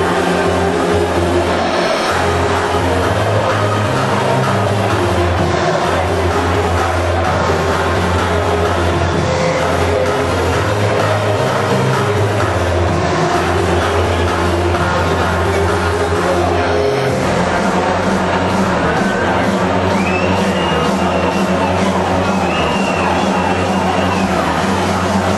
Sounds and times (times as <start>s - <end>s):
Music: 0.0s - 25.3s
Speech: 0.0s - 25.3s.